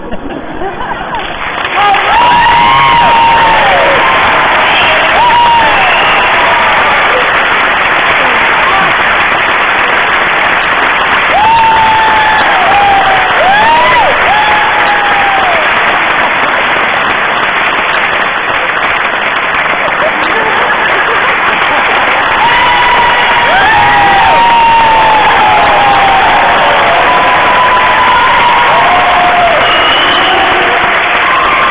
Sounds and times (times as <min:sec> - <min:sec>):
Crowd: 0:00.0 - 0:31.7.